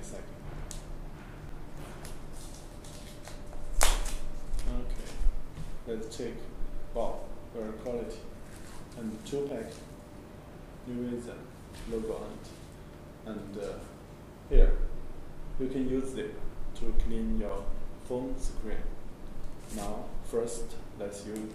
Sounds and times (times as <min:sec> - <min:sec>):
Speech: 0:00.0 - 0:00.4, 0:04.6 - 0:05.2, 0:05.9 - 0:08.3, 0:09.0 - 0:09.9, 0:10.8 - 0:12.6, 0:13.2 - 0:14.9, 0:15.6 - 0:19.0, 0:19.7 - 0:21.5.